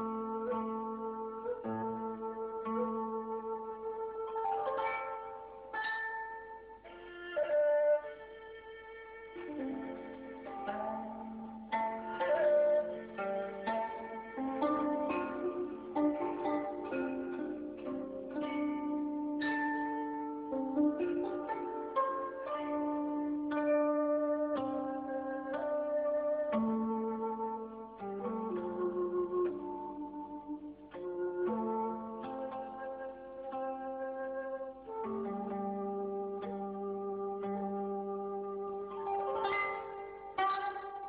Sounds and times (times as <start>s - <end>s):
Music: 0.0s - 41.0s.